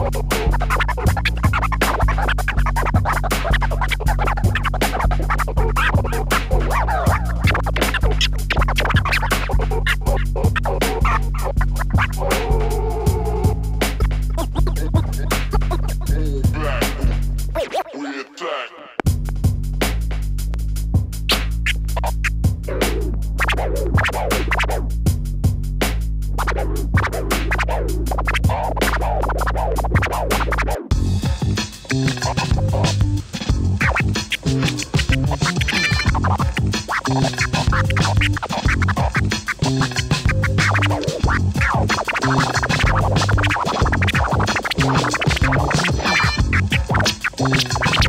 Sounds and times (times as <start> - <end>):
Electronic music: 0.0 - 20.1, 21.0 - 25.0, 26.2 - 48.0
Hip hop music: 0.0 - 25.0, 26.0 - 48.0
Scratching (performance technique): 0.0 - 48.0.